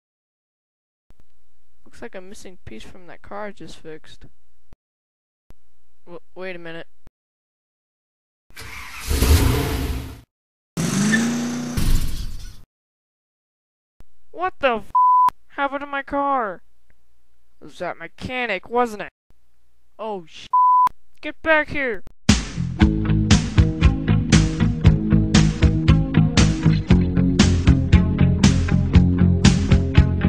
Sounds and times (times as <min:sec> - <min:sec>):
Speech: 0:01.9 - 0:04.3, 0:06.0 - 0:06.9, 0:14.4 - 0:16.6, 0:17.6 - 0:19.1, 0:20.0 - 0:20.6, 0:21.2 - 0:22.1
Car: 0:08.6 - 0:10.2, 0:10.8 - 0:12.5.